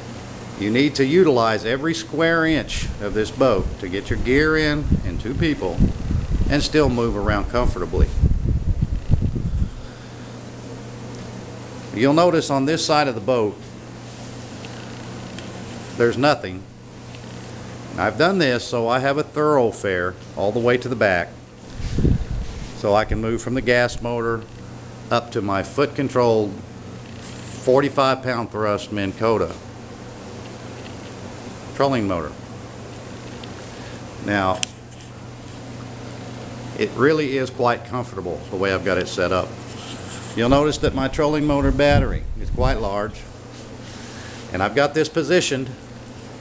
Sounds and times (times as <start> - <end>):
Speech: 0.6 - 5.8, 6.5 - 8.2, 11.9 - 13.7, 16.0 - 16.7, 18.0 - 21.4, 22.8 - 24.5, 25.1 - 26.6, 27.6 - 29.6, 31.8 - 32.4, 34.2 - 34.7, 36.8 - 39.6, 40.4 - 43.3, 44.5 - 45.8.